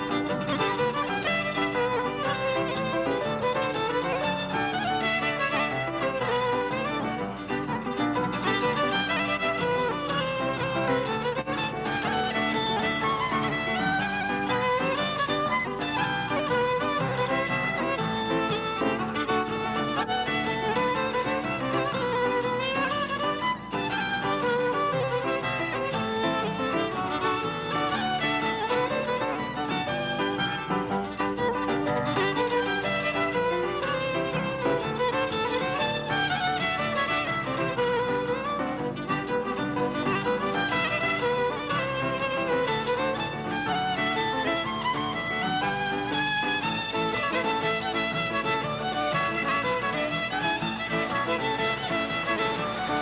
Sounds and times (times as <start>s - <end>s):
Violin, fiddle: 0.0s - 53.0s.